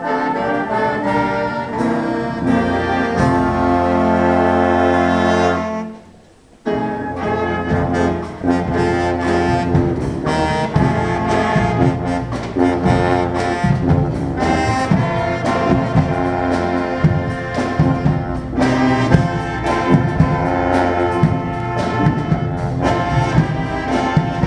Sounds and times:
Classical music: 0.0s - 24.4s
Inside, large room or hall: 0.0s - 24.4s
Jazz: 0.0s - 24.4s
Orchestra: 0.0s - 24.4s.

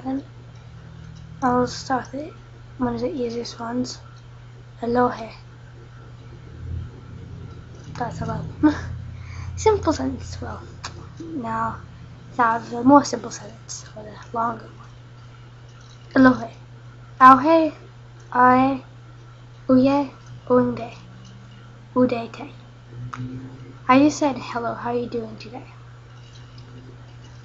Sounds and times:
Speech: 0.0s - 0.3s, 1.4s - 4.0s, 4.8s - 5.4s, 7.2s - 14.8s, 16.2s - 16.6s, 17.2s - 18.8s, 19.7s - 21.1s, 22.0s - 25.8s.

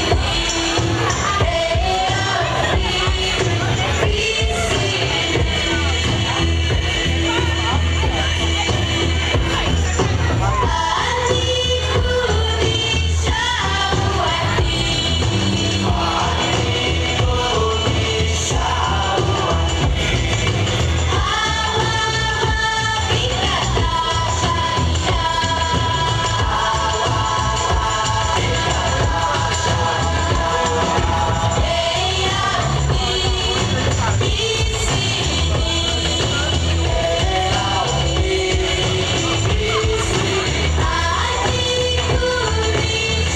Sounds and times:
Music: 0.0s - 43.3s.

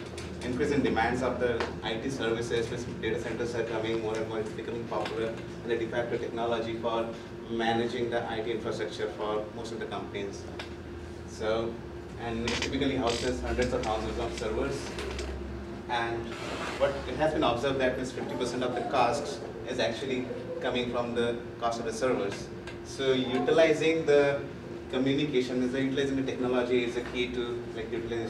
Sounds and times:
Speech: 0.3s - 10.6s, 11.3s - 15.0s, 15.9s - 28.3s.

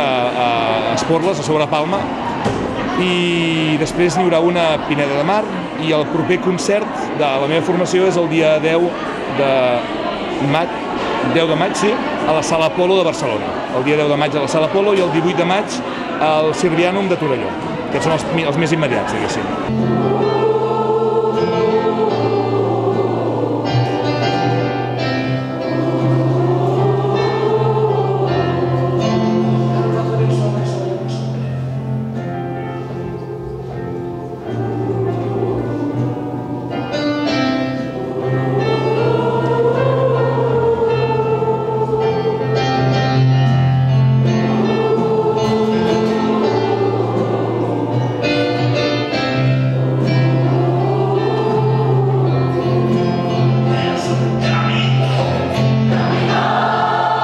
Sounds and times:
Choir: 0.0s - 57.2s
Crowd: 0.0s - 57.2s
Gospel music: 0.0s - 57.2s.

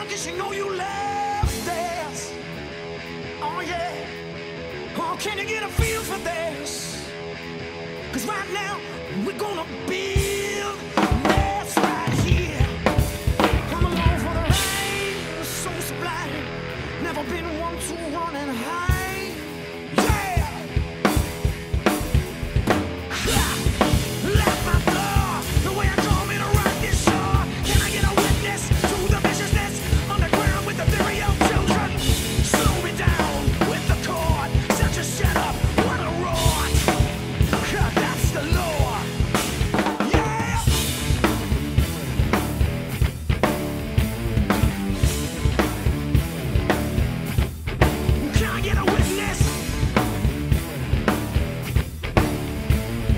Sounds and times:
Drum kit: 0.0s - 17.8s, 18.6s - 53.1s
Drum: 10.2s - 15.4s, 20.0s - 53.1s.

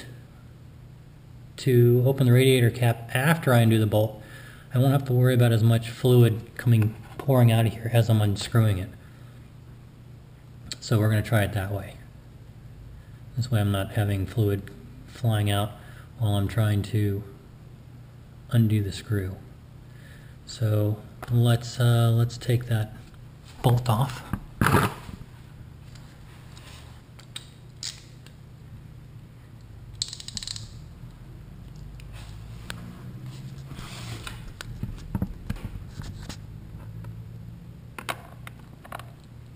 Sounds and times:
Speech: 1.6s - 9.0s, 10.7s - 12.1s, 13.4s - 17.4s, 18.5s - 19.5s, 20.5s - 24.3s.

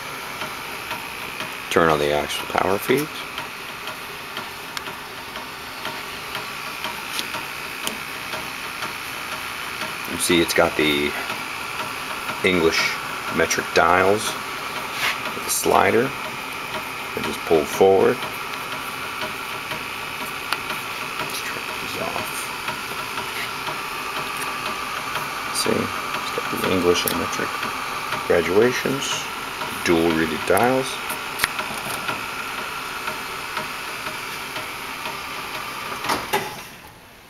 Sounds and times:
Speech: 1.7s - 3.2s, 10.1s - 11.2s, 12.4s - 14.4s, 15.4s - 16.2s, 17.2s - 18.2s, 21.3s - 22.5s, 25.5s - 27.5s, 28.3s - 31.0s.

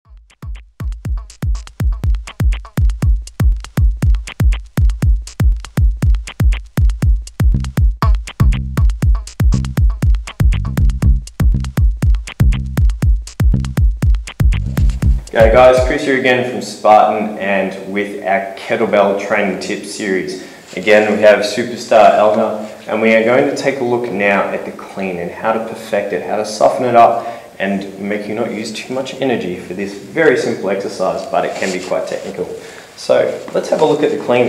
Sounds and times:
Sampler: 0.1s - 16.0s.

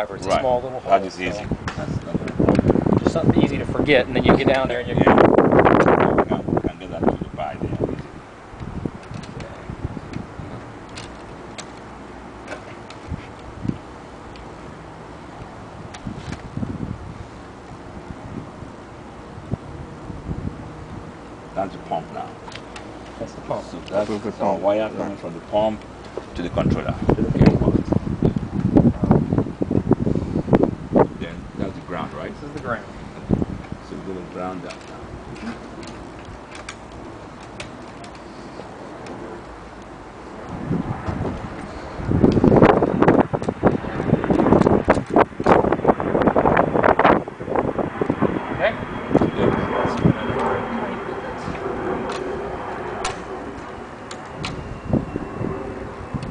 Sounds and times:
Speech: 0.0s - 2.4s, 3.0s - 5.2s, 6.1s - 8.0s, 21.6s - 22.4s, 23.2s - 27.9s, 31.2s - 33.0s, 33.8s - 34.9s
Wind: 0.0s - 56.3s.

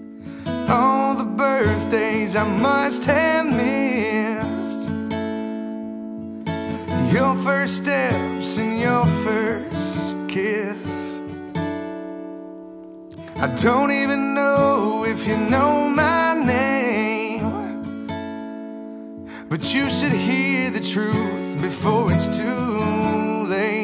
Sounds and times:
Acoustic guitar: 0.0s - 23.8s.

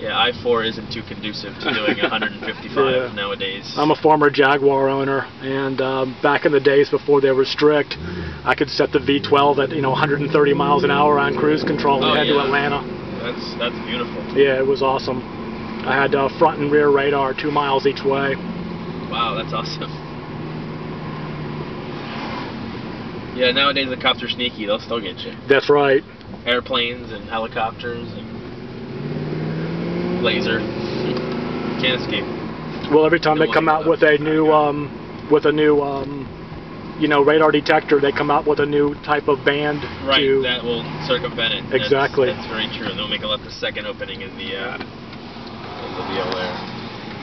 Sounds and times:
Speech: 0.0s - 15.2s, 15.8s - 18.4s, 19.1s - 20.0s, 23.4s - 28.2s, 31.8s - 32.3s, 32.9s - 36.3s, 37.0s - 44.8s
Car: 0.0s - 47.2s.

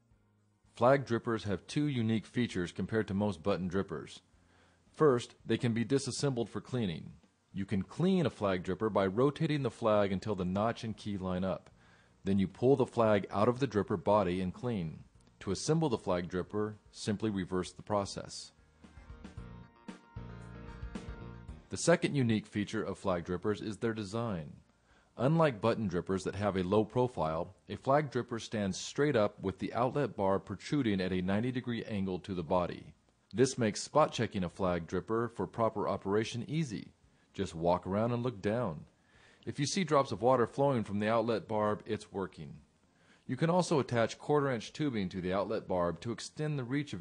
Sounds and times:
Speech: 0.7s - 4.3s, 4.9s - 18.6s, 21.7s - 42.7s, 43.3s - 47.0s.

